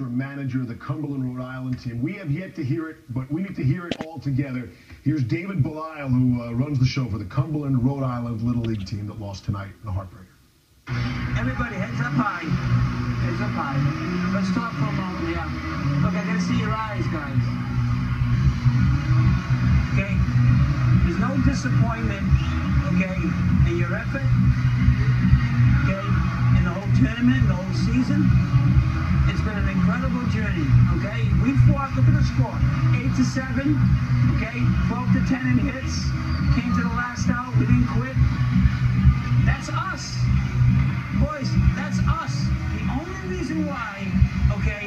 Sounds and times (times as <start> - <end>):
Male speech, man speaking: 0.0 - 10.4, 11.4 - 12.6, 13.2 - 17.6, 19.9 - 20.4, 21.0 - 24.4, 25.8 - 28.4, 29.3 - 38.2, 39.5 - 40.3, 41.2 - 44.8
Music: 10.9 - 44.8.